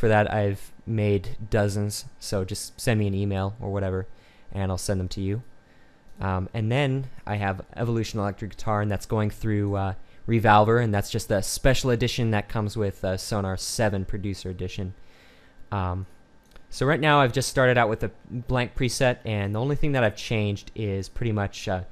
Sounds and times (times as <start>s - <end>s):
Speech: 0.0s - 5.5s, 6.2s - 15.0s, 15.7s - 16.1s, 16.7s - 21.9s.